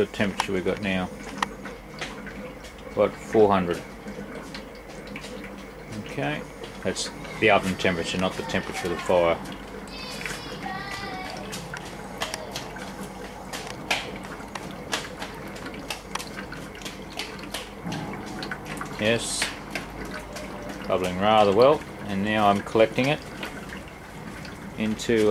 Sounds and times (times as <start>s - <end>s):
Speech: 5.9s - 9.4s, 19.0s - 19.6s, 24.8s - 25.3s.